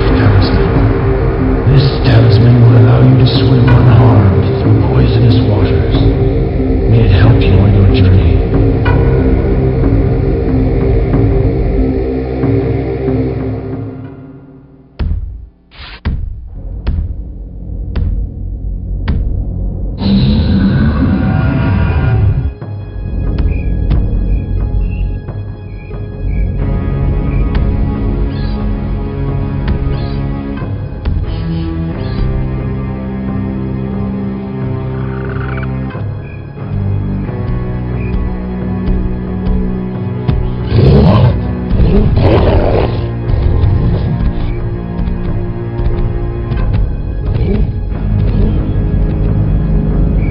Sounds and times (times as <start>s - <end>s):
Music: 0.0s - 50.3s
Speech: 1.7s - 6.1s, 6.9s - 8.5s.